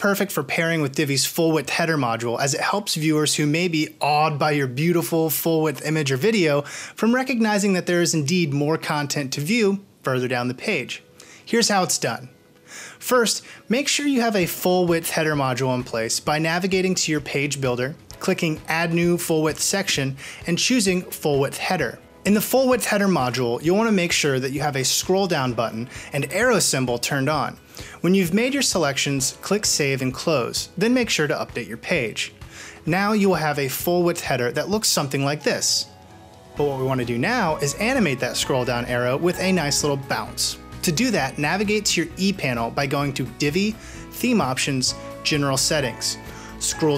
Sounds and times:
Speech: 0:00.0 - 0:12.3, 0:13.0 - 0:35.9, 0:36.6 - 0:46.9
Music: 0:00.0 - 0:46.9.

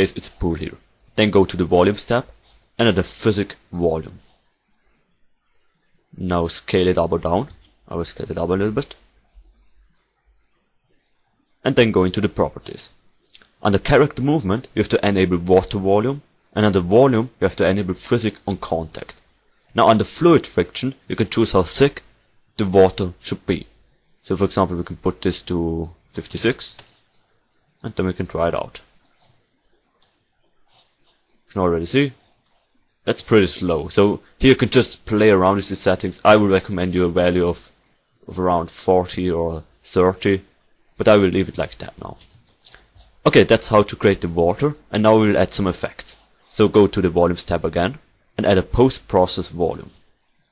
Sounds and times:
Speech: 0:00.0 - 0:04.3, 0:06.2 - 0:09.0, 0:11.6 - 0:26.9, 0:27.8 - 0:29.0, 0:31.5 - 0:32.2, 0:33.1 - 0:42.3, 0:43.2 - 0:50.0.

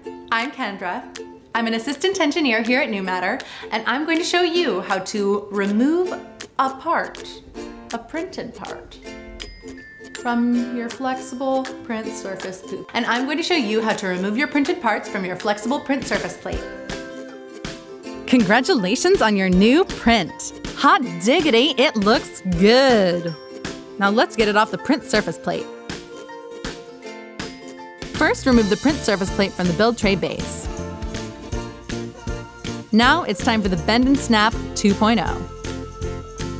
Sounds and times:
Music: 0:00.0 - 0:36.5
Speech: 0:00.3 - 0:09.0, 0:10.3 - 0:16.6, 0:18.3 - 0:23.4, 0:24.0 - 0:25.7, 0:28.2 - 0:30.7, 0:33.0 - 0:35.5.

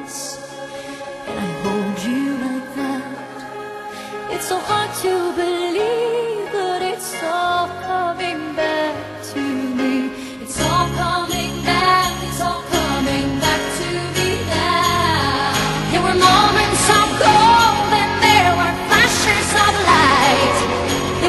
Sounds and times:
Jingle bell: 0:10.6 - 0:21.2.

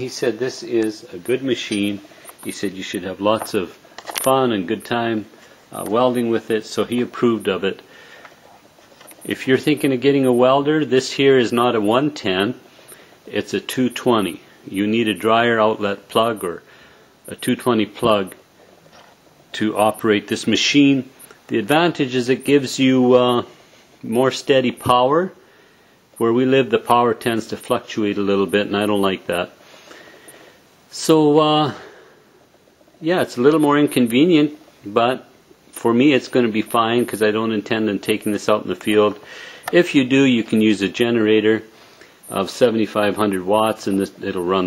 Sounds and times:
Speech: 0:00.0 - 0:07.9, 0:09.2 - 0:12.6, 0:13.3 - 0:16.7, 0:17.3 - 0:18.4, 0:19.5 - 0:25.4, 0:26.2 - 0:29.6, 0:30.9 - 0:32.0, 0:33.0 - 0:41.7, 0:42.3 - 0:44.6.

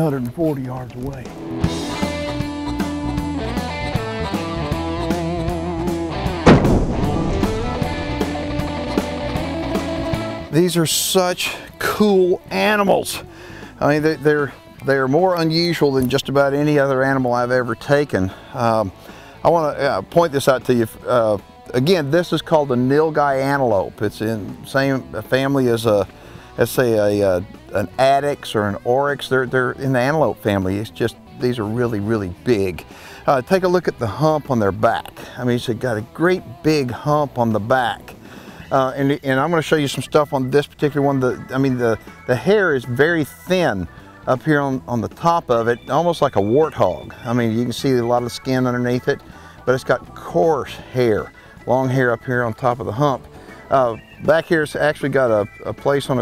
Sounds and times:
Speech: 0:00.0 - 0:01.3, 0:10.5 - 0:13.2, 0:13.8 - 0:18.9, 0:19.5 - 0:38.1, 0:38.7 - 0:56.2
Music: 0:00.0 - 0:56.2.

